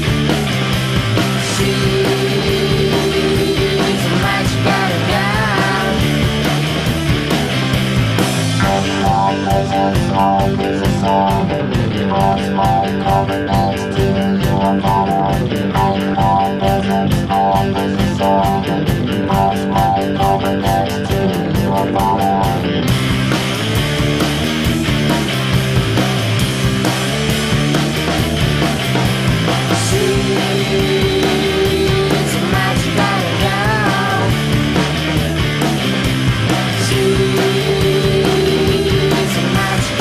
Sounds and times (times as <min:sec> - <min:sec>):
Music: 0:00.0 - 0:40.0.